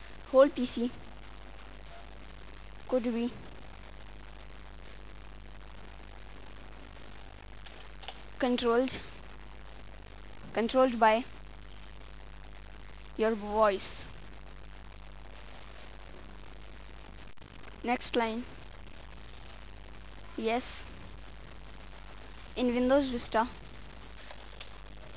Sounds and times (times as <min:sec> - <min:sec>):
Female speech, woman speaking: 0:00.3 - 0:01.0, 0:02.9 - 0:03.4, 0:08.4 - 0:09.1, 0:10.6 - 0:11.3, 0:13.2 - 0:14.1, 0:17.8 - 0:18.5, 0:20.4 - 0:20.8, 0:22.6 - 0:23.6
Speech synthesizer: 0:00.3 - 0:01.0, 0:02.9 - 0:03.4, 0:08.4 - 0:09.1, 0:10.6 - 0:11.3, 0:13.2 - 0:14.1, 0:17.9 - 0:18.5, 0:20.4 - 0:20.8, 0:22.6 - 0:23.5
Narration, monologue: 0:02.9 - 0:03.4, 0:08.4 - 0:09.2, 0:10.5 - 0:11.4, 0:13.2 - 0:14.2, 0:22.2 - 0:23.6.